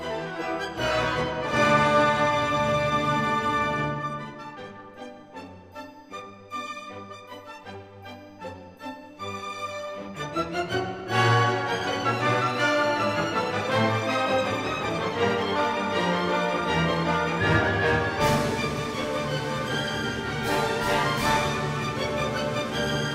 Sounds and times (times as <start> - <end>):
Music: 0.0 - 23.1.